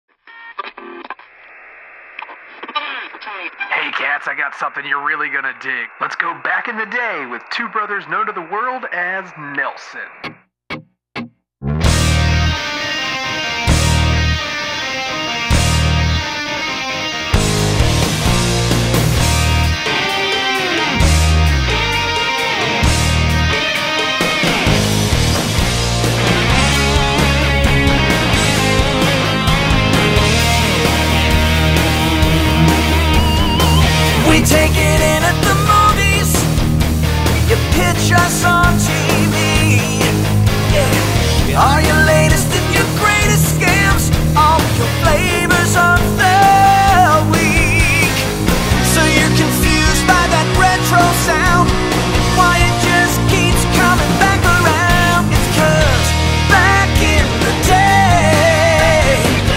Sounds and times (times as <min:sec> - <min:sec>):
Radio: 0:00.3 - 0:10.4, 0:32.4 - 0:36.3, 0:37.4 - 0:43.8
Speech: 0:03.3 - 0:10.2, 0:40.7 - 0:42.1.